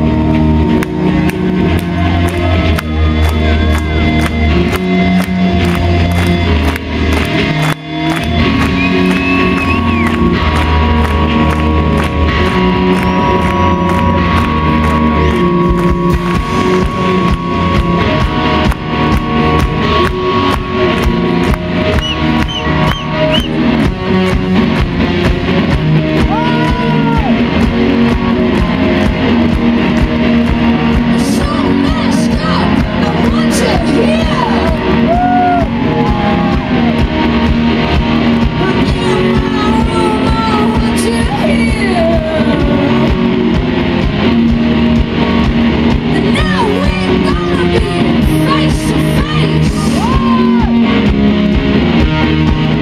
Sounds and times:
Music: 0.0 - 52.8.

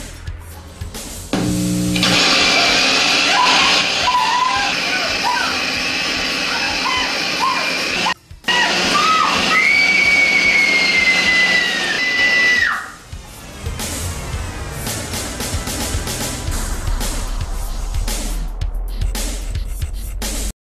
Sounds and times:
Music: 0.0 - 20.6.

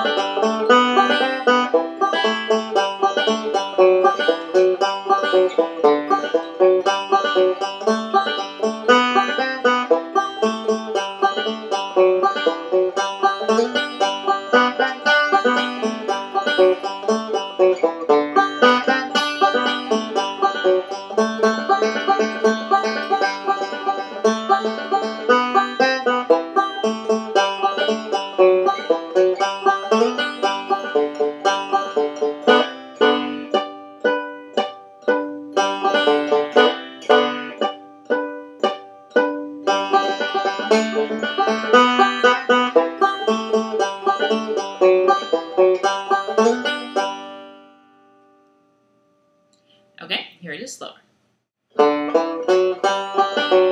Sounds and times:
Music: 0.0 - 49.8, 51.7 - 53.7.

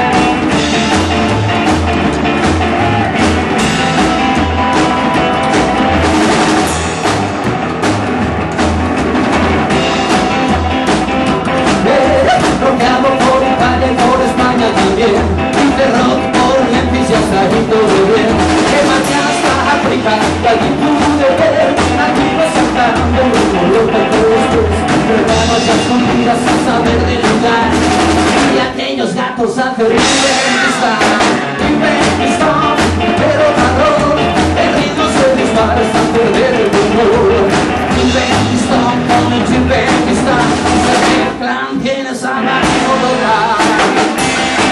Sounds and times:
Music: 0.0 - 44.7.

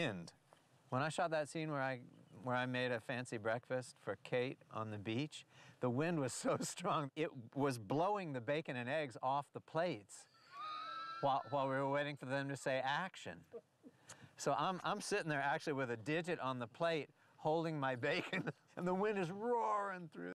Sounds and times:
Speech: 0.0 - 10.2, 11.2 - 13.6, 14.4 - 20.3.

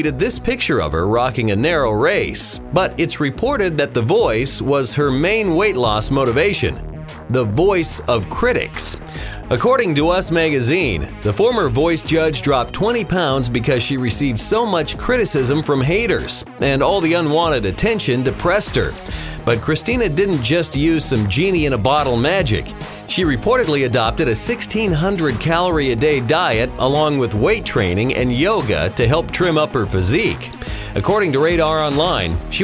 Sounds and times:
Music: 0.0 - 32.6
Speech: 0.0 - 32.6.

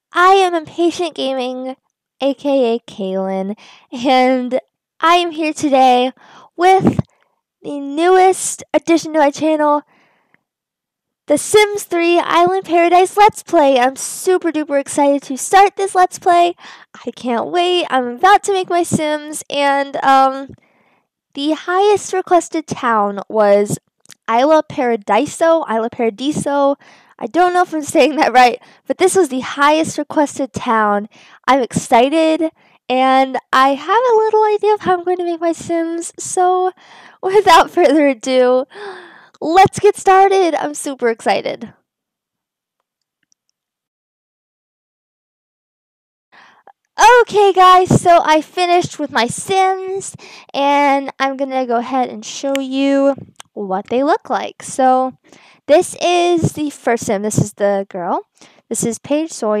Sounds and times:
Speech: 0.1 - 7.0, 7.6 - 9.8, 11.3 - 20.6, 21.4 - 41.7, 47.0 - 59.6.

